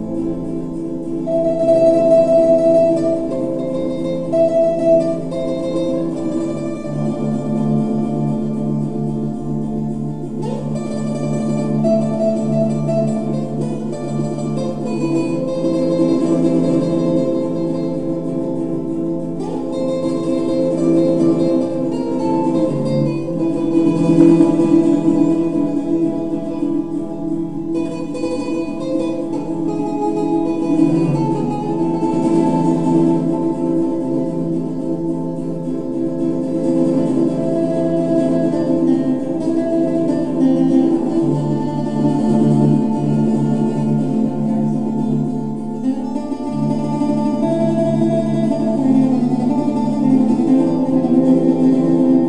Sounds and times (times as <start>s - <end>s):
Acoustic guitar: 0.0s - 52.2s
Strum: 0.0s - 52.2s.